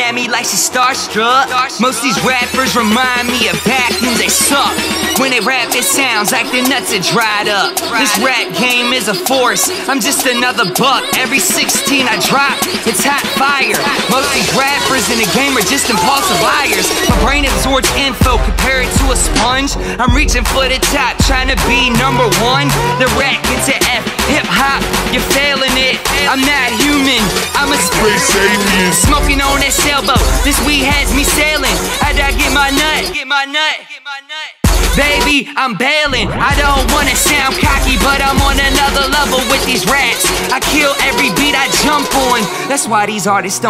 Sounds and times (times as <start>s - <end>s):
Middle Eastern music: 0.0s - 33.2s
Rhythm and blues: 0.0s - 33.2s, 34.6s - 35.4s, 36.1s - 43.6s.